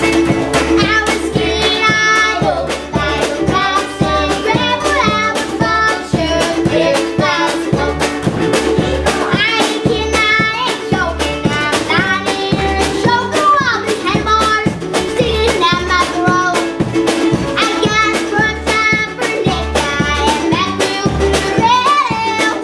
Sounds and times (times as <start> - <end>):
Music: 0.0 - 22.6.